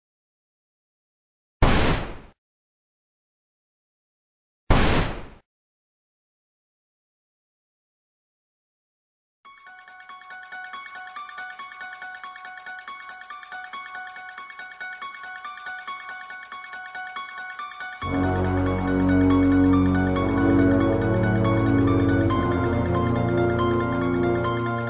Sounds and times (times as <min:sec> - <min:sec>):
Music: 0:09.5 - 0:24.8.